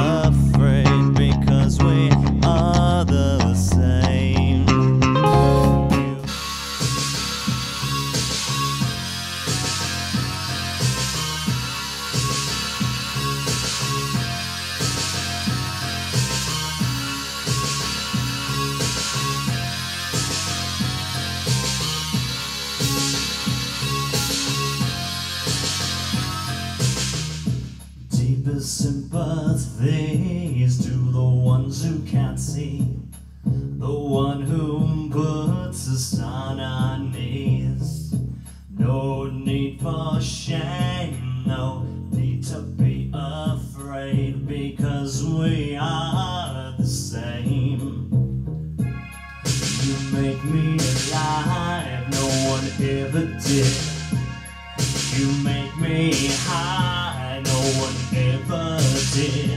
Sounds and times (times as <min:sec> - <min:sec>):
Electric guitar: 0:00.0 - 0:27.1
Bass guitar: 0:00.0 - 0:59.5
Heavy metal: 0:04.8 - 0:27.7, 0:48.8 - 0:59.5.